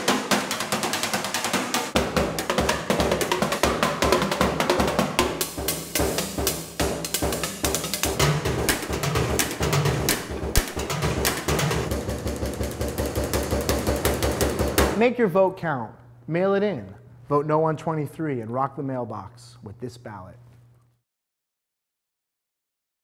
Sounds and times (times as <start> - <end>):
Music: 0.0 - 15.0.